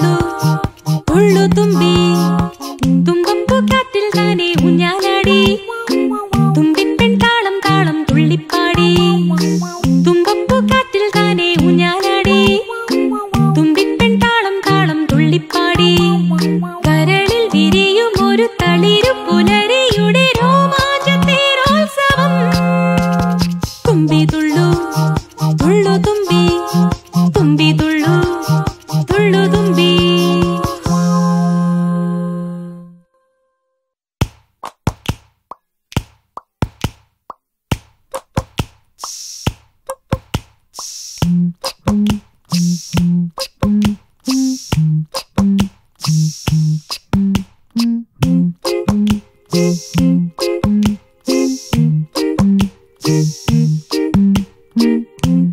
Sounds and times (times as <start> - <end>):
Music: 0.0 - 34.0, 39.0 - 55.5.